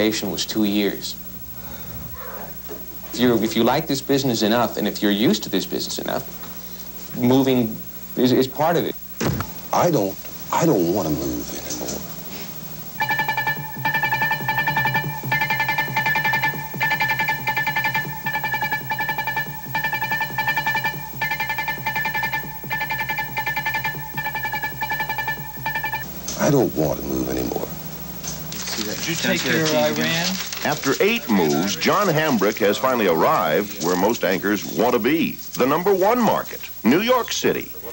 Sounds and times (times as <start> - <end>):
Speech: 0.0 - 1.2, 3.2 - 6.3, 28.8 - 37.9.